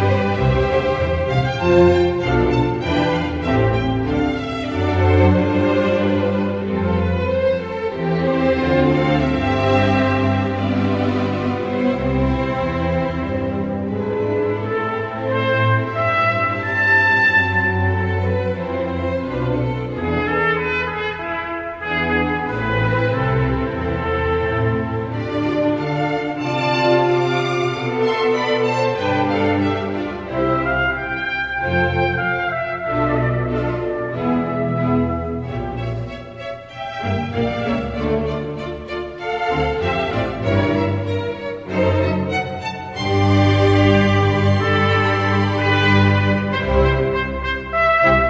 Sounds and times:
Trumpet: 14.1s - 18.8s, 19.6s - 38.3s, 41.8s - 48.2s.

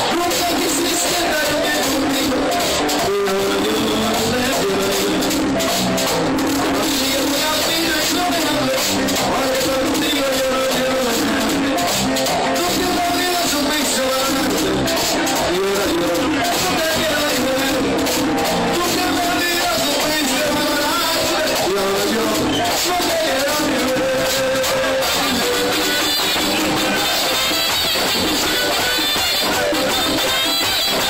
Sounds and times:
Speech: 0.0s - 5.2s, 18.7s - 24.8s
Music: 0.0s - 31.0s.

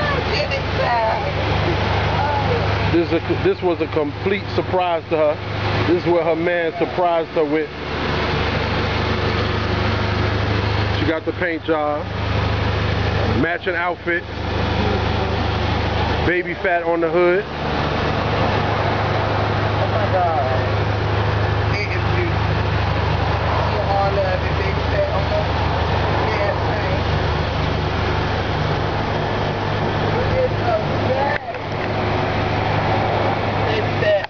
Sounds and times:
Outside, urban or manmade: 0.0s - 34.2s
Vehicle: 0.0s - 34.2s.

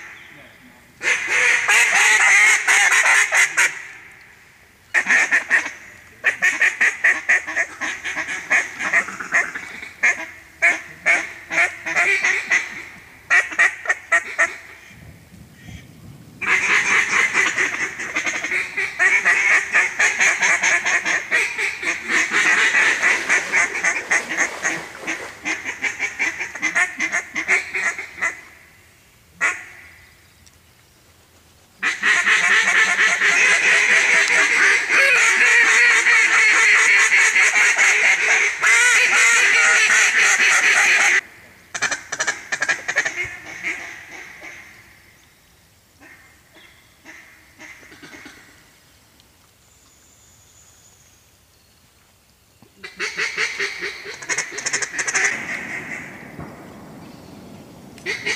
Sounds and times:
Quack: 1.0s - 4.0s, 5.0s - 15.0s, 16.4s - 28.6s, 29.4s - 30.0s, 31.8s - 44.9s, 46.0s - 48.6s, 52.8s - 56.2s, 58.0s - 58.3s.

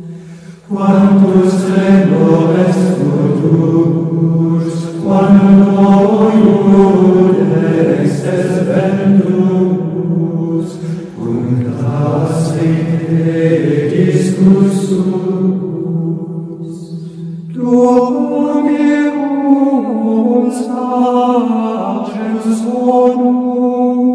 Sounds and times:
Mantra: 0.0s - 24.1s.

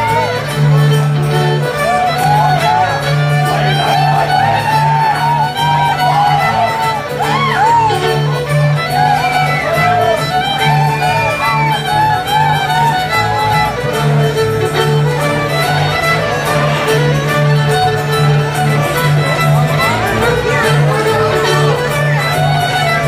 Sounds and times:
Violin, fiddle: 0.0s - 23.0s.

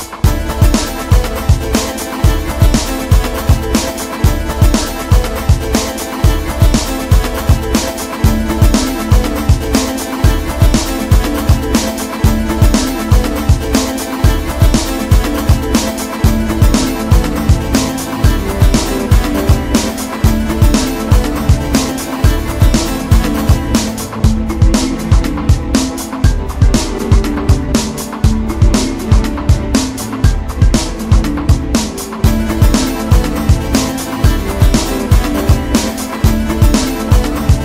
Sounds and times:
Music: 0.0s - 37.6s.

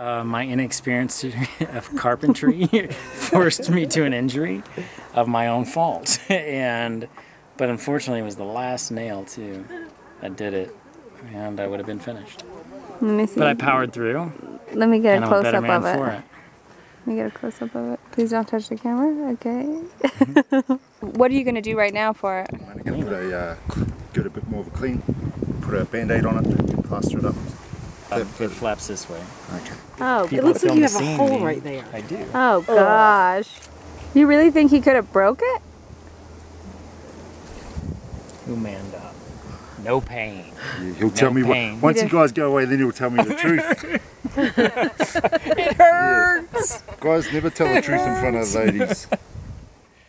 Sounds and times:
Outside, rural or natural: 0.0s - 50.0s.

